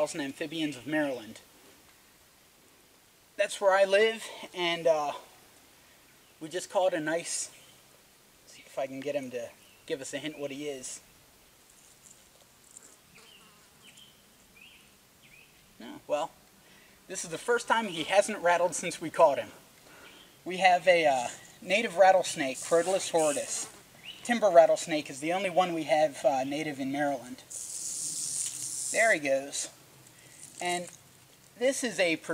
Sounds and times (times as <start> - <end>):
Snake: 22.2 - 23.8, 27.4 - 30.8.